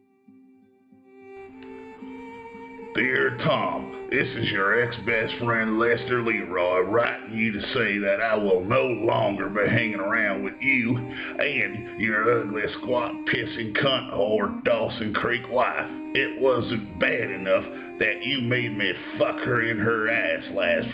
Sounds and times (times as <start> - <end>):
Music: 0.0 - 20.9
Speech: 3.0 - 20.9.